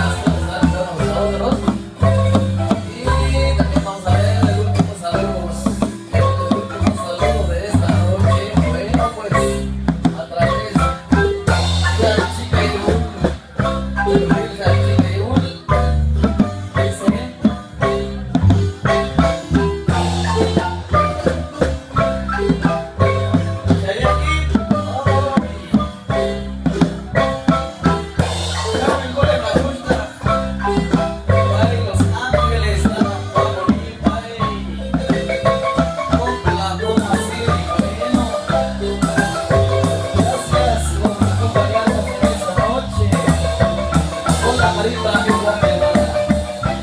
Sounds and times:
Marimba, xylophone: 0.0s - 46.8s.

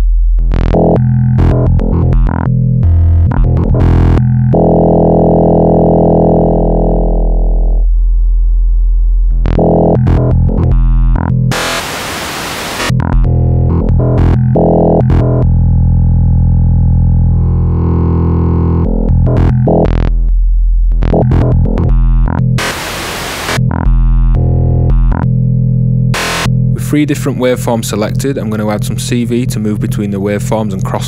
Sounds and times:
Synthesizer: 0.6s - 7.8s, 9.3s - 15.5s, 21.0s - 25.3s, 26.1s - 31.0s.

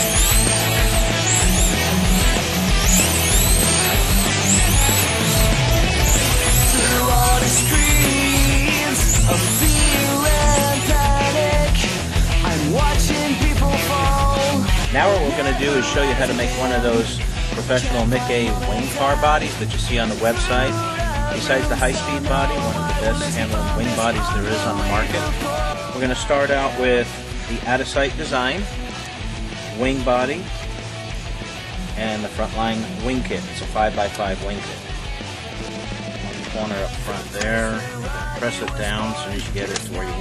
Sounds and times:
Music: 0.0s - 40.2s.

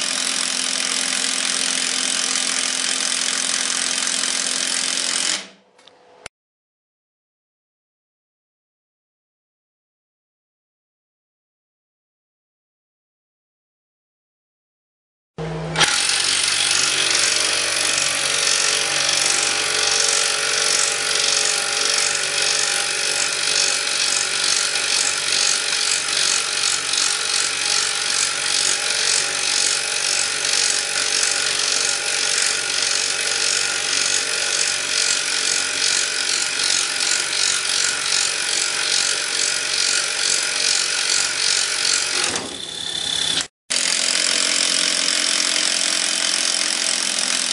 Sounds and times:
Tools: 15.8s - 47.5s.

